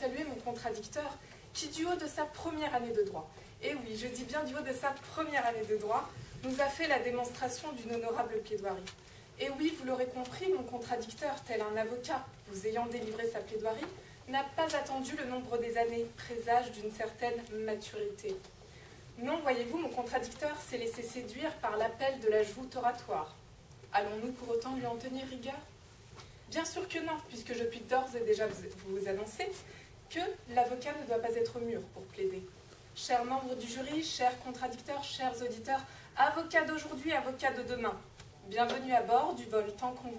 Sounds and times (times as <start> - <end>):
Speech: 0.0 - 18.5, 19.2 - 25.7, 26.5 - 40.1.